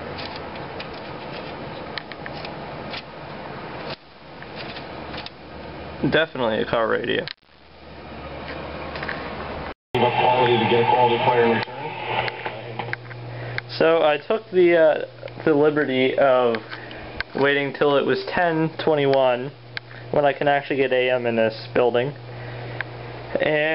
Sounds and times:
Speech: 6.0 - 7.3, 10.0 - 12.0, 13.7 - 16.6, 17.4 - 22.2, 23.3 - 23.7
Radio: 10.0 - 14.1.

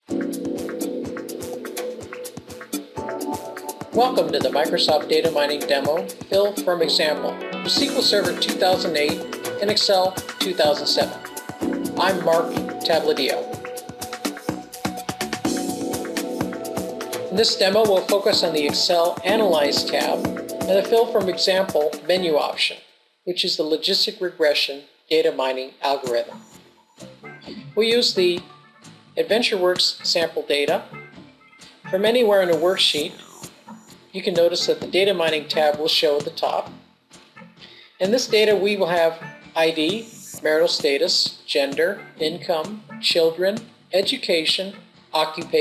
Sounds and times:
Music: 0.0 - 22.7, 26.0 - 45.6
Speech: 4.0 - 11.2, 12.0 - 13.5, 17.3 - 26.4, 27.8 - 28.5, 29.2 - 30.9, 31.9 - 33.2, 34.2 - 36.7, 38.0 - 45.6.

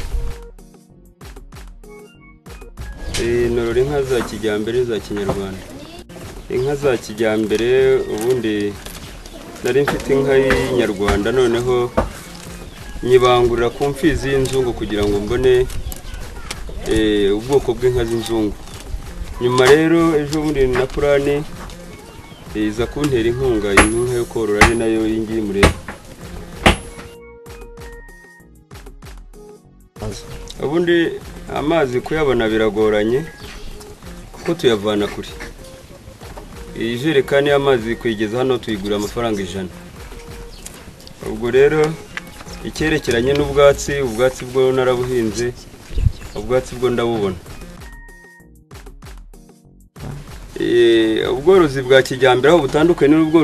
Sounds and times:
Speech: 3.2 - 8.8, 9.6 - 12.0, 13.0 - 18.6, 19.4 - 21.5, 22.5 - 25.8, 30.0 - 33.4, 34.4 - 35.5, 36.8 - 39.7, 41.2 - 45.6, 46.3 - 47.4, 50.6 - 53.4.

